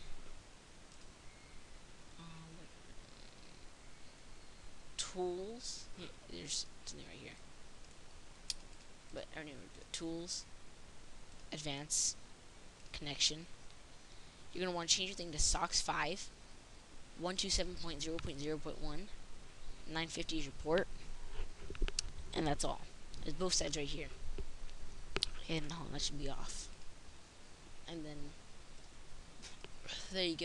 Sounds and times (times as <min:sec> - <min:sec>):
Inside, small room: 0:00.0 - 0:30.4
Speech: 0:05.0 - 0:07.4, 0:09.2 - 0:10.5, 0:11.6 - 0:12.2, 0:13.0 - 0:13.5, 0:14.6 - 0:16.3, 0:17.2 - 0:19.2, 0:19.9 - 0:20.9, 0:22.3 - 0:24.2, 0:25.4 - 0:26.7, 0:27.9 - 0:28.4, 0:29.9 - 0:30.4.